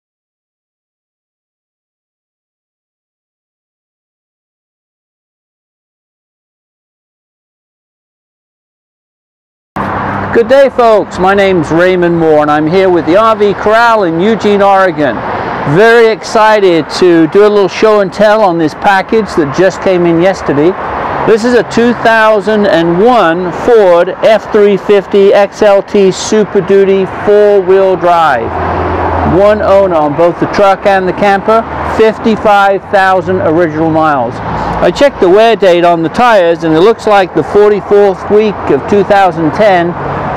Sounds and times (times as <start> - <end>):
Vehicle: 9.8 - 40.3
Speech: 10.4 - 28.5, 29.3 - 40.0.